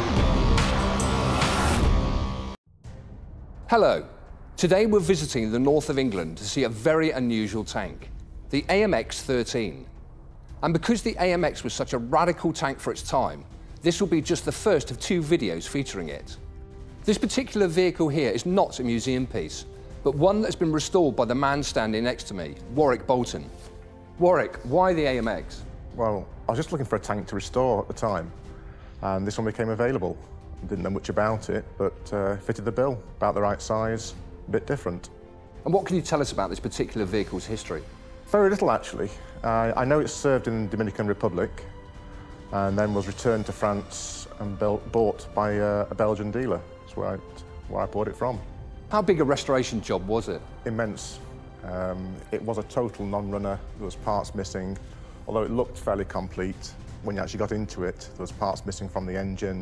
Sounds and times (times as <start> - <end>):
Music: 0.0 - 59.6
Speech: 3.8 - 9.9, 10.6 - 16.4, 17.0 - 23.5, 24.2 - 28.3, 29.0 - 41.7, 42.5 - 59.6.